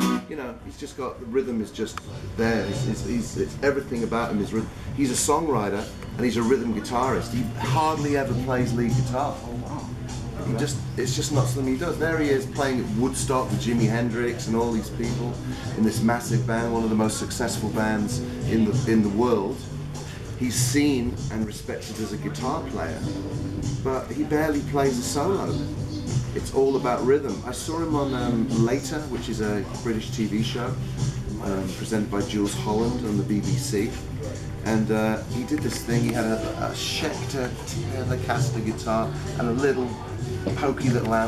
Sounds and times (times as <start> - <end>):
Music: 0.0 - 41.2
Speech: 0.2 - 19.7, 20.4 - 23.2, 23.8 - 25.8, 26.4 - 41.2.